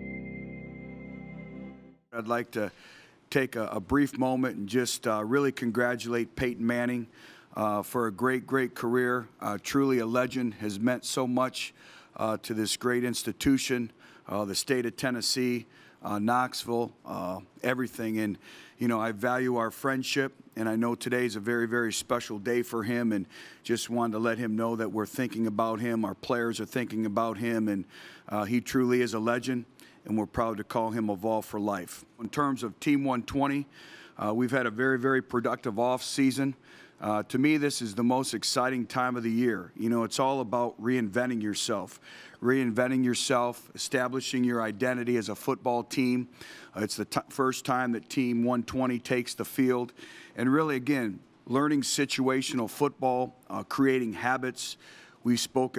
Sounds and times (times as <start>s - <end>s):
Speech: 2.1s - 55.7s.